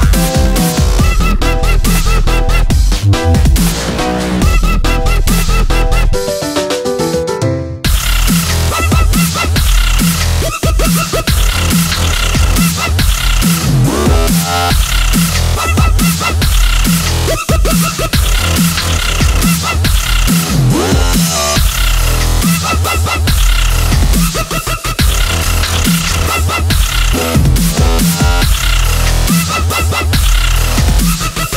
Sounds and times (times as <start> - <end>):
Dubstep: 0.0 - 6.6, 7.9 - 31.5.